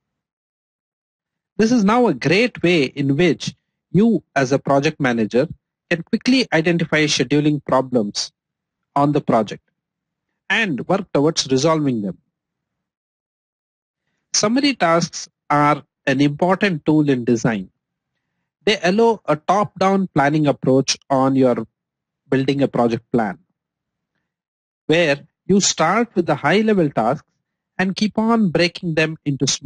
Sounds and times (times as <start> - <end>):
Speech: 1.6 - 8.3, 9.0 - 9.6, 10.5 - 12.2, 14.4 - 17.7, 18.7 - 21.7, 22.3 - 23.4, 24.9 - 27.2, 27.8 - 29.6.